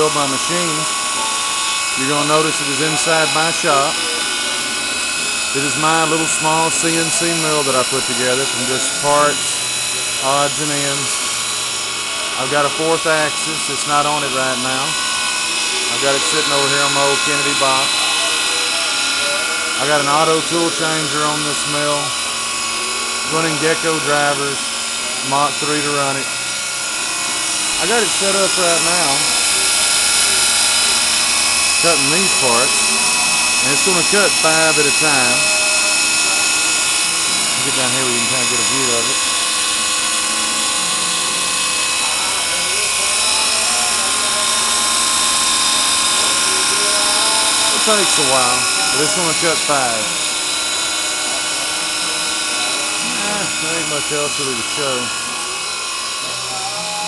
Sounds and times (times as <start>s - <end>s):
Speech: 0.0s - 0.9s, 2.0s - 4.2s, 5.5s - 9.4s, 10.2s - 11.2s, 12.4s - 15.0s, 15.8s - 22.1s, 23.3s - 24.6s, 25.2s - 26.3s, 27.8s - 29.5s, 31.8s - 32.8s, 33.6s - 35.6s, 37.5s - 39.3s, 46.2s - 50.2s, 52.6s - 55.1s
Drill: 0.0s - 57.0s.